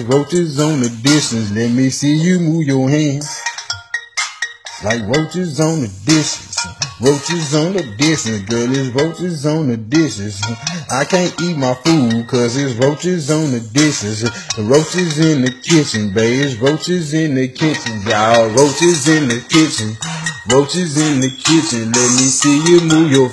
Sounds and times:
Male singing: 0:00.0 - 0:03.4, 0:04.8 - 0:23.3
Music: 0:00.0 - 0:23.3.

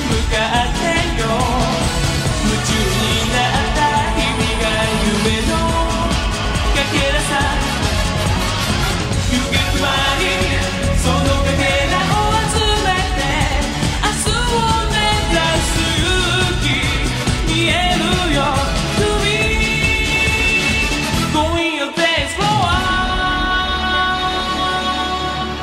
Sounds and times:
Music of Asia: 0:00.0 - 0:25.6.

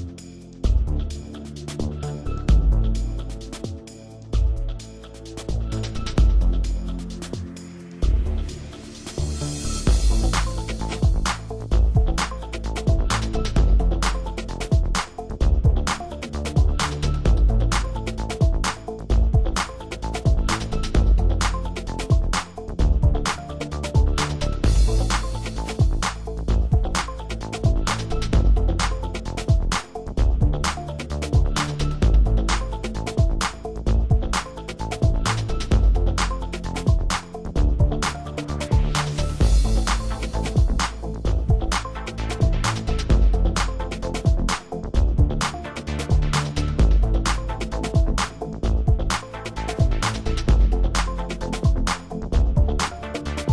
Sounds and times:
Music: 0:00.0 - 0:53.5.

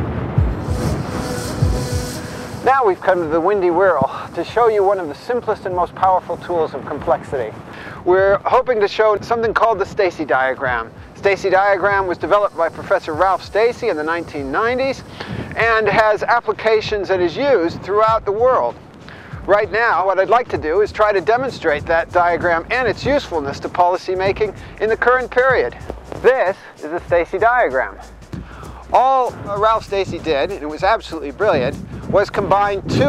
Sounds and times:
Speech: 0:02.6 - 0:15.0, 0:15.6 - 0:18.7, 0:19.5 - 0:28.0, 0:28.9 - 0:33.0.

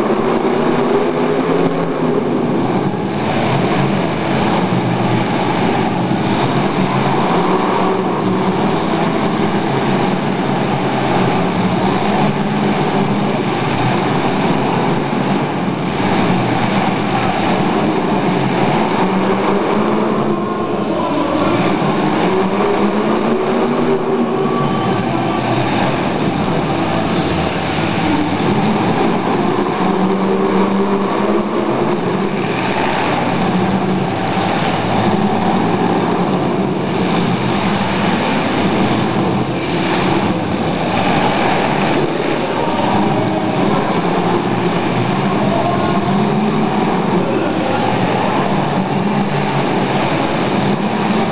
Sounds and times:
Car passing by: 0:00.0 - 0:51.3.

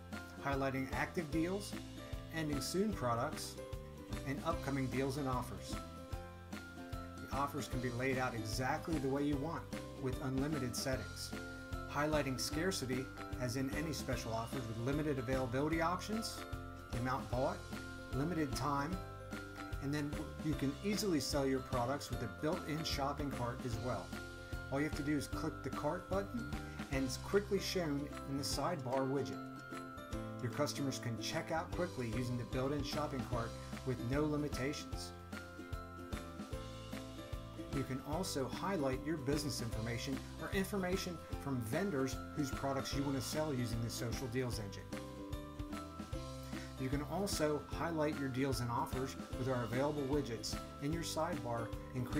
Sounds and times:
Music: 0:00.0 - 0:52.1
Speech: 0:00.4 - 0:03.6, 0:04.2 - 0:05.8, 0:07.3 - 0:17.6, 0:18.2 - 0:19.0, 0:19.8 - 0:24.1, 0:24.7 - 0:29.4, 0:30.4 - 0:35.1, 0:37.7 - 0:44.8, 0:46.8 - 0:52.1.

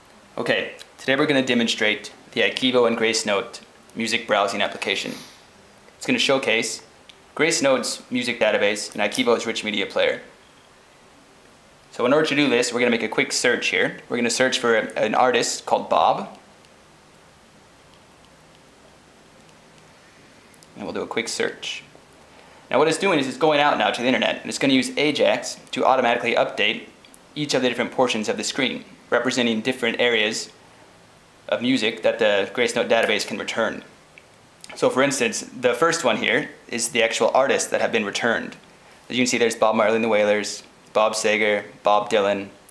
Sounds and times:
Speech: 0:00.4 - 0:05.3, 0:06.0 - 0:10.3, 0:11.9 - 0:16.4, 0:20.8 - 0:21.9, 0:22.7 - 0:30.6, 0:31.5 - 0:33.9, 0:34.7 - 0:42.6.

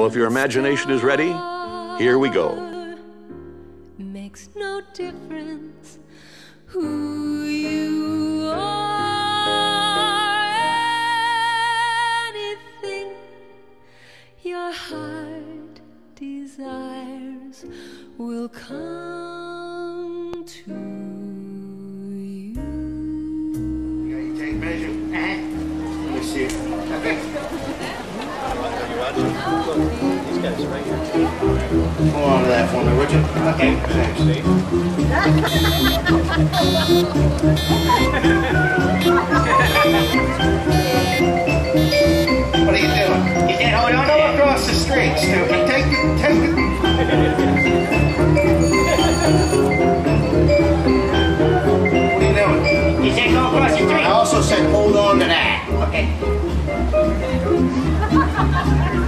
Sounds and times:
Music: 0:00.0 - 0:59.0.

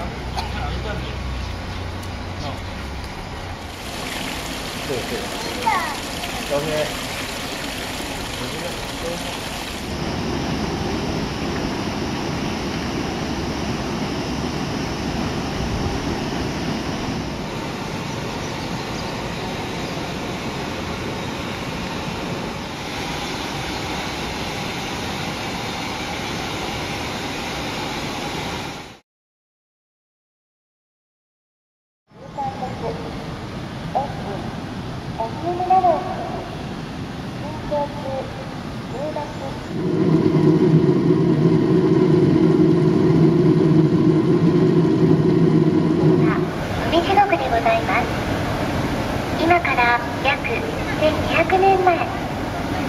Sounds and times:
Water: 0:01.6 - 0:26.3, 0:32.2 - 0:52.8.

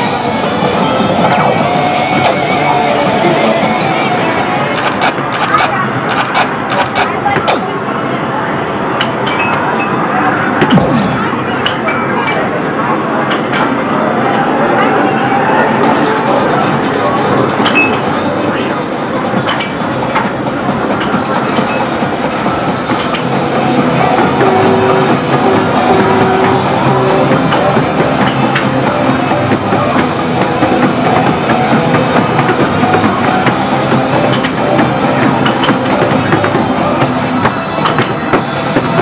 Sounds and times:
Background music: 0:00.0 - 0:05.3, 0:15.7 - 0:39.0
Video game music: 0:00.0 - 0:05.3, 0:15.9 - 0:39.0.

